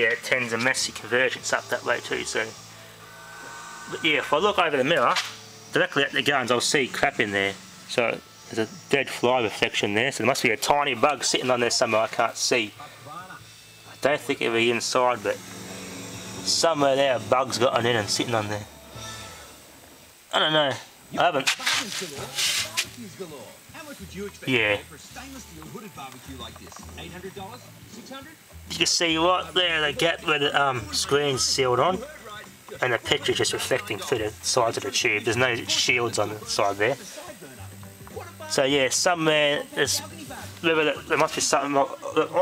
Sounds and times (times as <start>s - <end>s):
Speech: 0.0s - 2.5s, 3.9s - 15.4s, 16.4s - 18.7s, 20.3s - 42.4s.